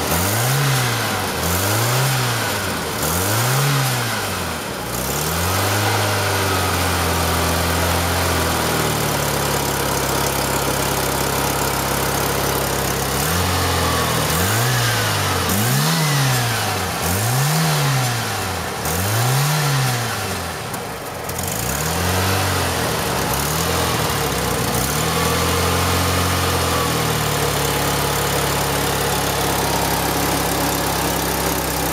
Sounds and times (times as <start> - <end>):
Car: 0.0 - 31.9
Medium engine (mid frequency): 0.0 - 31.9.